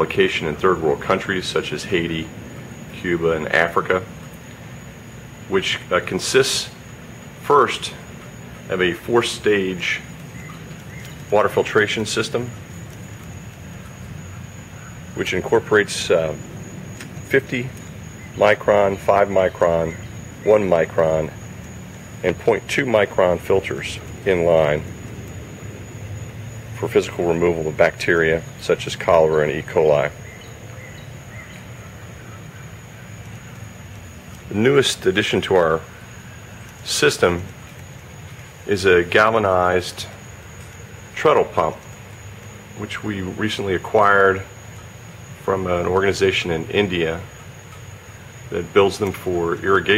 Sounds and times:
Speech: 0.0s - 4.1s, 5.5s - 6.8s, 7.4s - 8.1s, 8.7s - 10.1s, 11.3s - 12.6s, 15.2s - 16.4s, 17.2s - 17.8s, 18.4s - 21.4s, 22.2s - 24.9s, 26.8s - 30.2s, 34.5s - 35.9s, 36.8s - 37.6s, 38.7s - 40.2s, 41.2s - 41.9s, 42.8s - 44.5s, 45.4s - 47.3s, 48.5s - 49.9s.

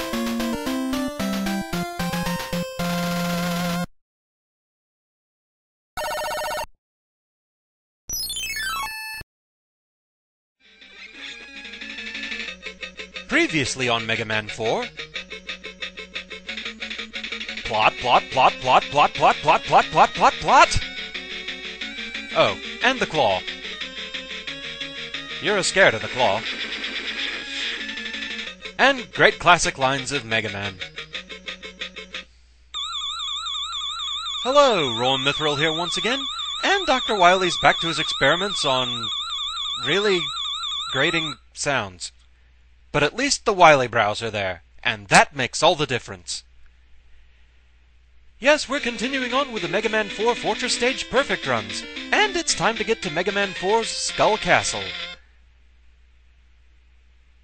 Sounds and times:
Speech: 13.3s - 14.9s, 17.7s - 20.8s, 22.4s - 23.4s, 25.4s - 26.4s, 28.8s - 30.8s, 34.5s - 39.1s, 39.8s - 40.3s, 40.9s - 42.2s, 43.0s - 46.5s, 48.4s - 54.9s.

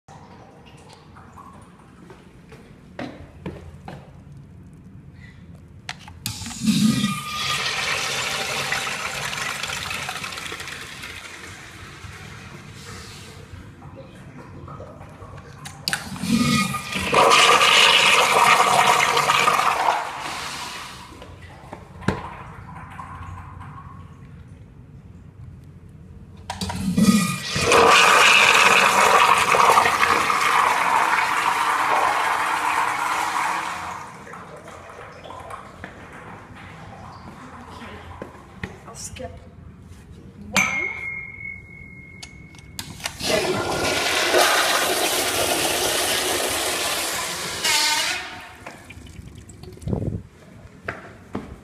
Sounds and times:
Toilet flush: 6.3s - 13.6s, 14.7s - 24.0s, 26.5s - 38.4s, 43.0s - 49.7s.

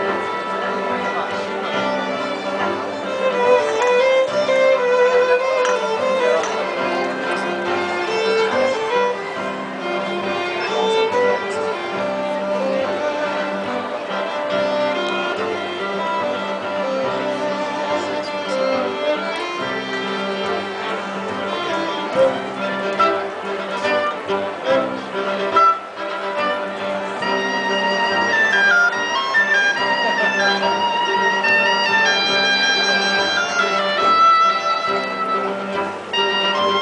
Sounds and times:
Music: 0.0s - 36.8s.

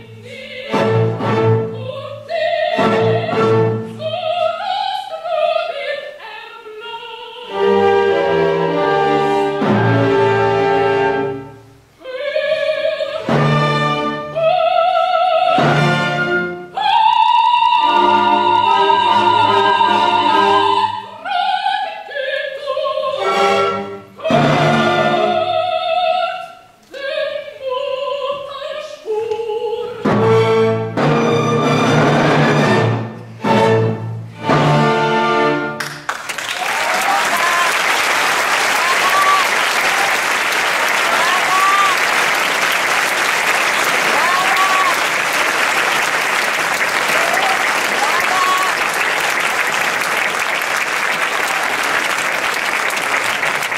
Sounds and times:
Applause: 35.8s - 53.7s.

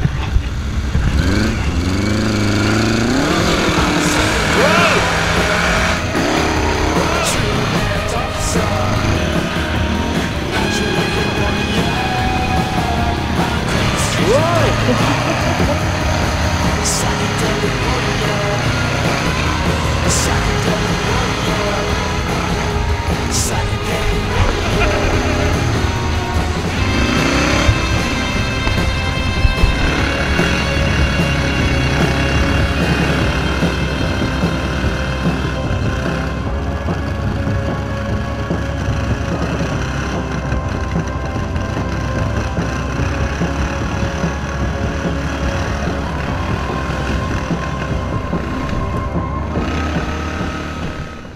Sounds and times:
Vehicle: 0.0s - 51.3s.

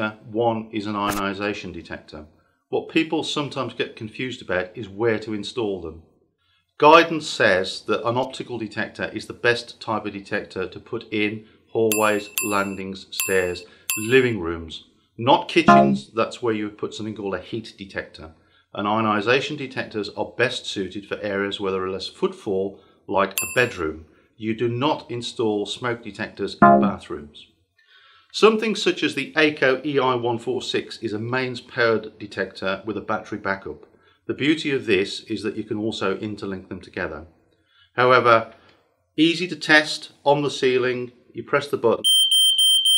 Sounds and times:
Speech: 0.0s - 6.1s, 6.8s - 27.6s, 28.3s - 37.3s, 38.0s - 38.6s, 39.2s - 42.1s.

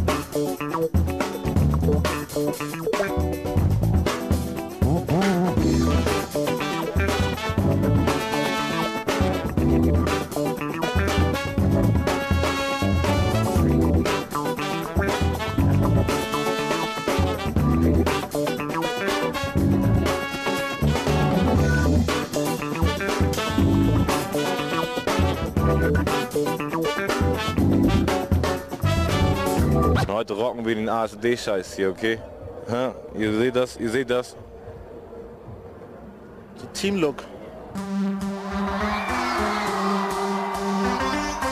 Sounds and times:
Music: 0.0s - 30.1s, 37.7s - 41.5s.

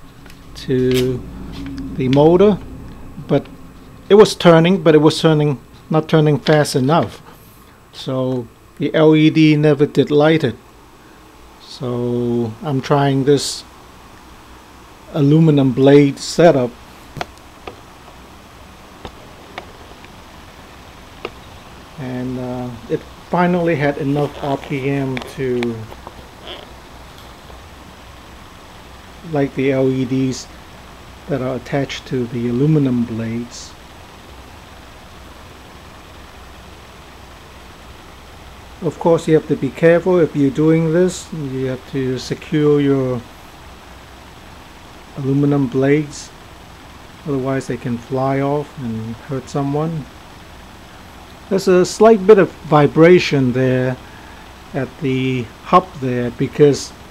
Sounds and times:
Speech: 0.6s - 1.2s, 1.9s - 2.6s, 4.1s - 7.3s, 8.0s - 10.6s, 11.6s - 13.7s, 15.1s - 16.8s, 22.0s - 26.0s, 29.2s - 30.5s, 31.3s - 33.8s, 38.8s - 43.3s, 45.2s - 46.4s, 47.2s - 50.1s, 51.5s - 54.0s, 54.7s - 57.0s.

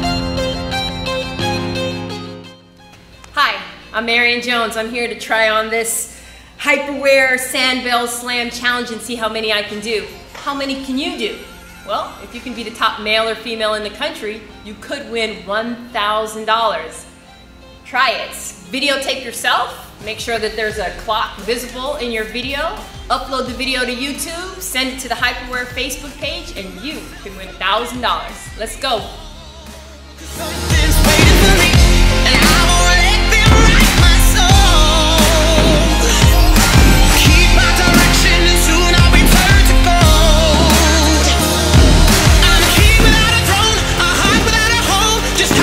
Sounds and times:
Music: 0.0s - 45.6s
Speech: 17.9s - 29.2s.

